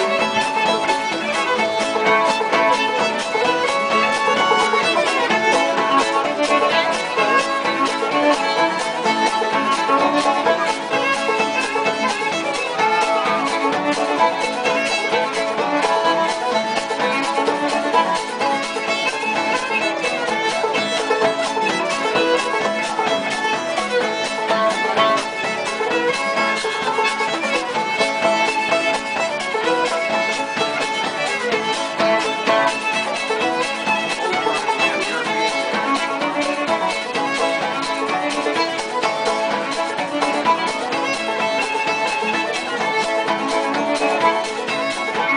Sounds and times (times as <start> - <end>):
Pizzicato: 0.0 - 45.3.